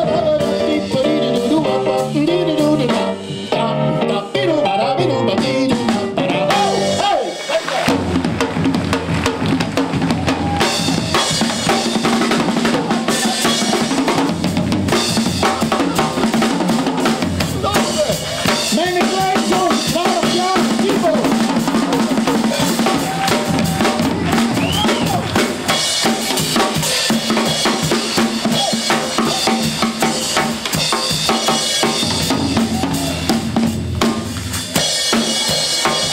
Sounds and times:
Drum kit: 0:00.0 - 0:36.1
Drum: 0:05.4 - 0:36.1.

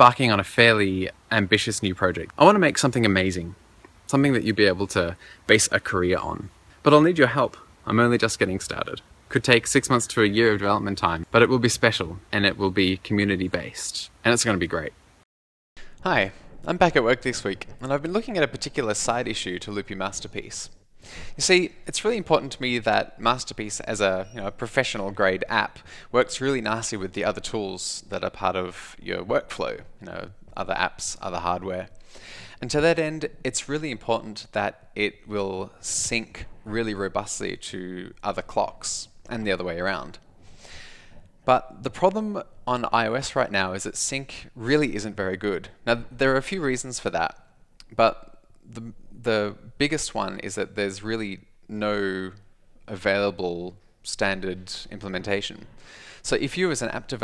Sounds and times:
Speech: 0:00.0 - 0:15.0, 0:16.0 - 0:20.8, 0:21.4 - 0:32.0, 0:32.6 - 0:40.2, 0:41.5 - 0:57.2.

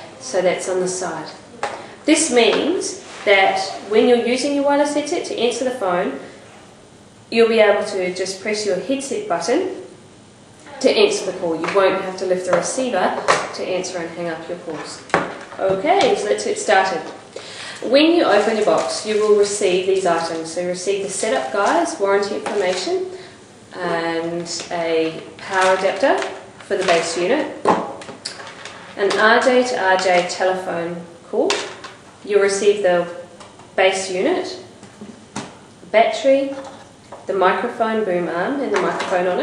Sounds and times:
Speech: 0:00.0 - 0:06.3, 0:07.3 - 0:09.9, 0:10.7 - 0:17.2, 0:17.8 - 0:27.6, 0:29.0 - 0:34.7, 0:35.9 - 0:39.4.

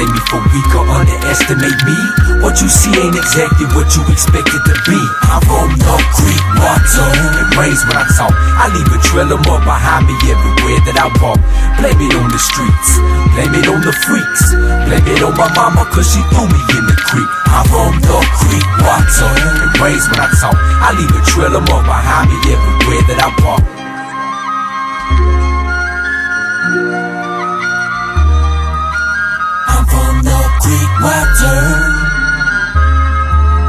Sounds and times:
Rapping: 0:00.0 - 0:23.7, 0:29.7 - 0:32.2
Hip hop music: 0:00.0 - 0:33.6.

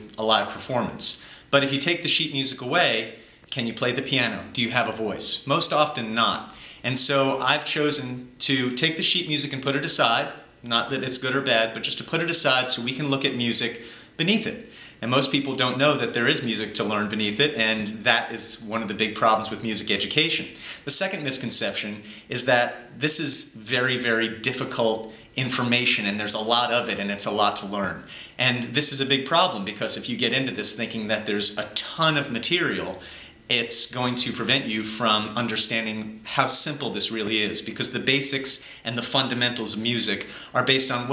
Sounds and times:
Speech: 0:00.0 - 0:41.1.

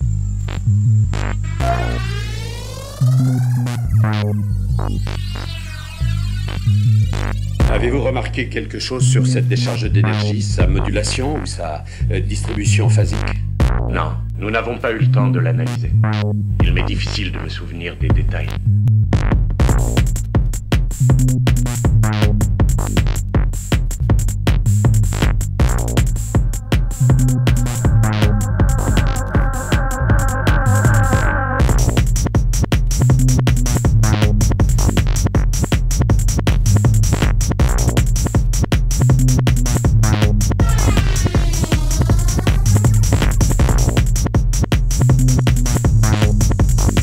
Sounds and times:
Techno: 0:00.0 - 0:11.2, 0:19.2 - 0:47.0
Speech: 0:07.6 - 0:16.0, 0:16.6 - 0:18.6.

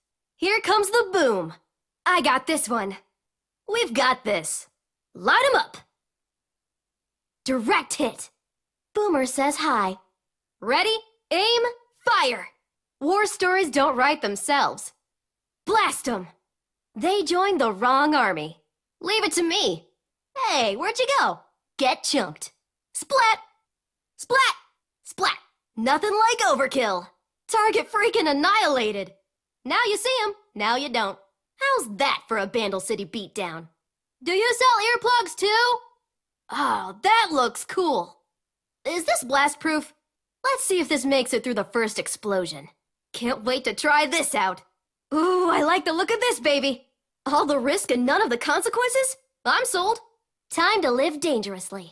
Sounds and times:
Speech: 0:00.4 - 0:03.1, 0:03.7 - 0:05.9, 0:07.5 - 0:08.4, 0:09.0 - 0:10.0, 0:10.6 - 0:15.0, 0:15.7 - 0:16.4, 0:17.0 - 0:23.5, 0:24.2 - 0:35.9, 0:36.5 - 0:38.2, 0:38.9 - 0:51.9.

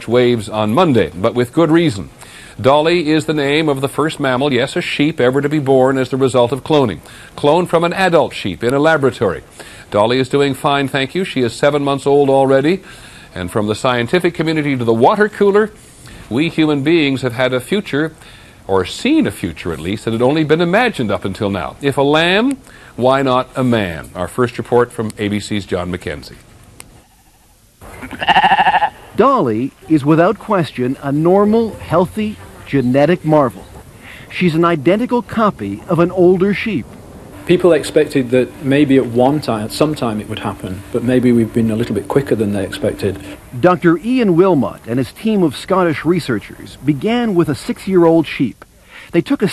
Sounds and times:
Speech: 0:00.0 - 0:12.8, 0:13.4 - 0:26.4, 0:29.2 - 0:33.7, 0:34.3 - 0:36.8, 0:37.5 - 0:49.5
Bleat: 0:27.9 - 0:29.1.

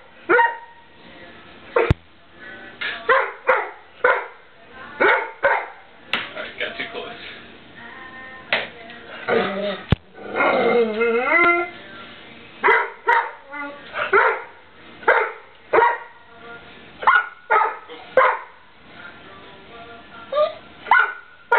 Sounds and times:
Bow-wow: 0:00.3 - 0:00.8, 0:03.1 - 0:04.4, 0:05.0 - 0:05.8, 0:12.6 - 0:13.4, 0:14.0 - 0:14.5, 0:15.1 - 0:16.1, 0:17.0 - 0:18.5, 0:20.9 - 0:21.5
Yip: 0:00.3 - 0:00.8, 0:12.6 - 0:13.4, 0:14.0 - 0:14.5, 0:15.1 - 0:16.1, 0:17.0 - 0:18.5, 0:20.4 - 0:21.5
Music: 0:00.7 - 0:21.5
Speech: 0:06.2 - 0:07.4.

